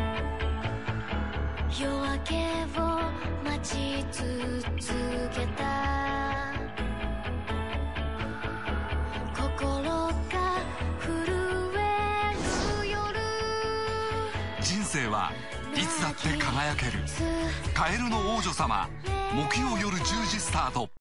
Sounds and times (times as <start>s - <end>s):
Music: 0.0s - 21.0s
Speech: 17.7s - 21.0s.